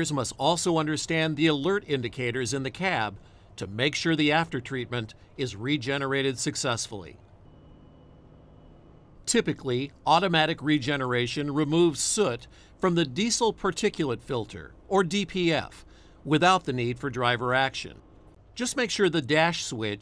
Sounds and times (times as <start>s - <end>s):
Speech: 0.0s - 7.2s, 9.3s - 18.0s, 18.6s - 20.0s.